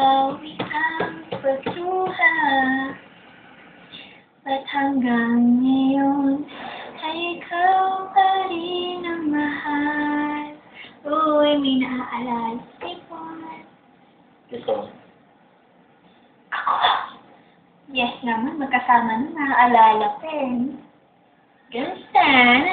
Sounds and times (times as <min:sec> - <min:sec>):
Female singing: 0:00.0 - 0:03.0, 0:04.5 - 0:13.7, 0:22.2 - 0:22.7.